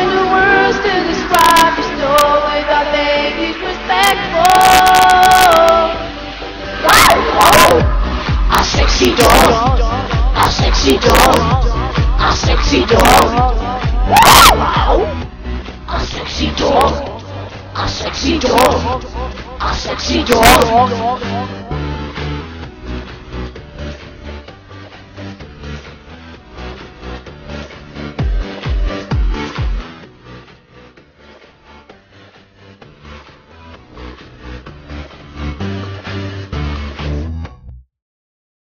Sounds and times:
Music: 0.0 - 37.9.

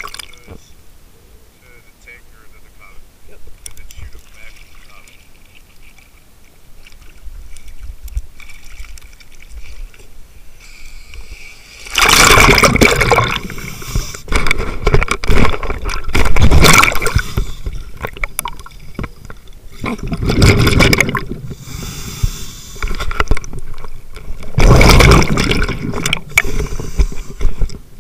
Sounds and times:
Liquid: 0.0 - 0.6, 3.6 - 10.2, 11.1 - 21.8, 22.7 - 27.9.

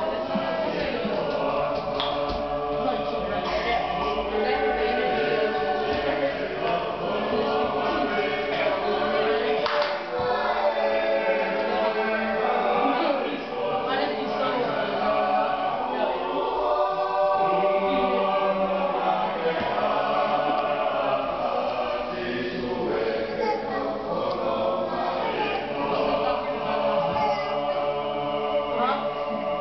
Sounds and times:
Choir: 0.0 - 29.6
Male singing: 0.0 - 29.6.

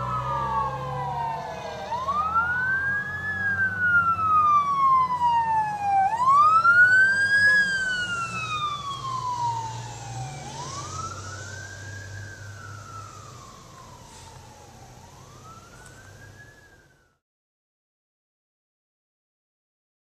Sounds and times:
Fire engine, fire truck (siren): 0.0 - 17.2.

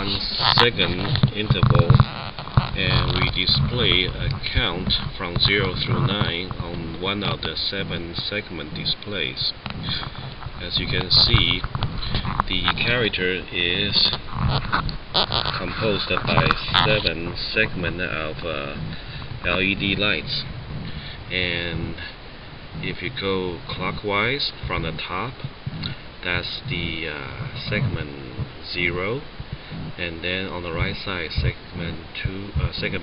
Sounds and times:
Speech: 0.0 - 14.2, 15.5 - 20.5, 21.3 - 22.2, 22.8 - 33.0.

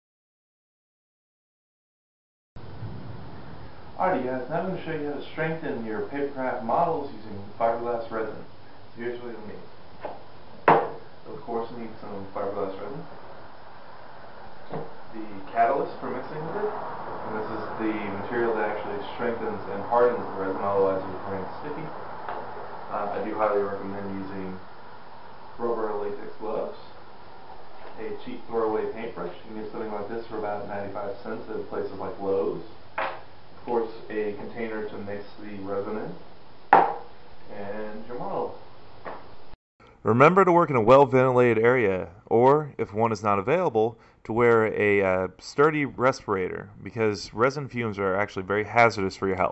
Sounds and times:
Speech: 4.0 - 9.7, 11.2 - 13.1, 15.2 - 21.9, 22.9 - 24.6, 25.6 - 26.9, 28.0 - 32.7, 33.6 - 36.2, 37.5 - 38.6, 40.0 - 49.5.

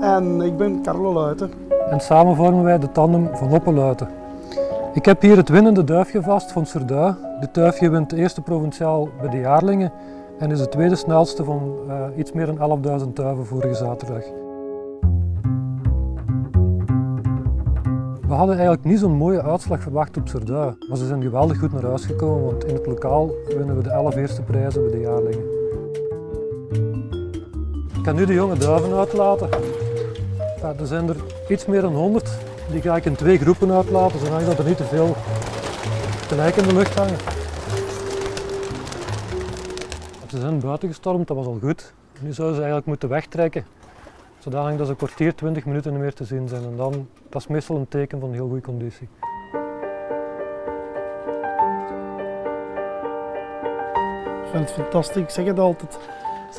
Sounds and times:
Speech: 0.0 - 4.1, 5.0 - 14.3, 18.2 - 25.5, 28.0 - 29.6, 30.6 - 35.2, 36.3 - 37.2, 40.3 - 43.7, 44.4 - 49.1, 54.5 - 56.0
Music: 0.0 - 40.6, 49.2 - 56.5.

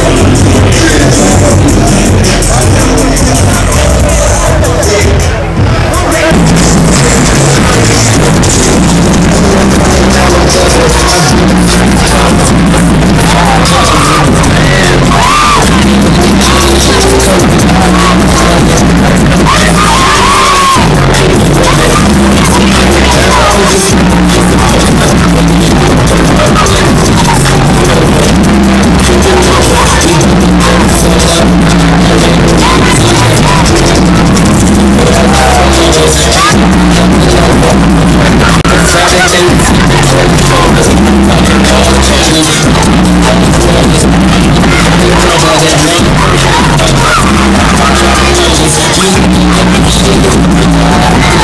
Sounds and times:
Music: 0.0 - 51.4.

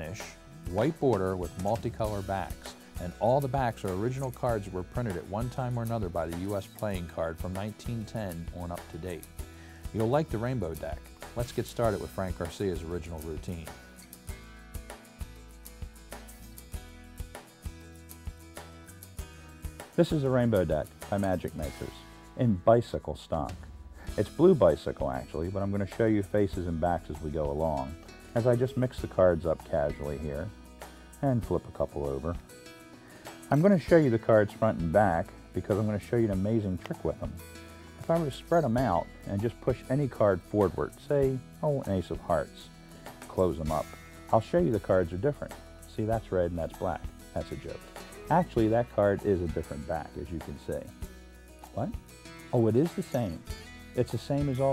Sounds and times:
Speech: 0.0 - 9.2, 9.9 - 13.8, 20.0 - 30.5, 31.2 - 32.4, 33.5 - 37.4, 38.0 - 42.7, 43.3 - 50.9, 51.7 - 54.7
Music: 0.0 - 54.7.

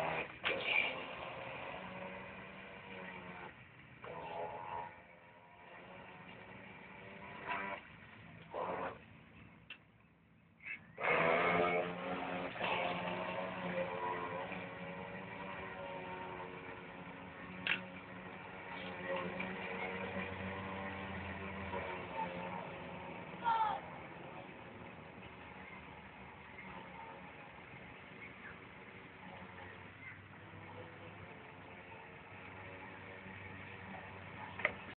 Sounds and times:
Motorboat, speedboat: 0.0 - 9.7, 10.7 - 34.9.

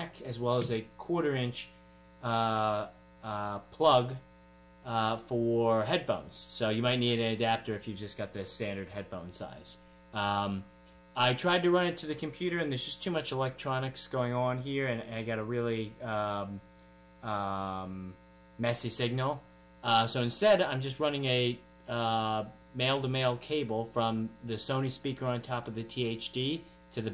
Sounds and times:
Speech: 0.0 - 16.6, 17.2 - 27.1.

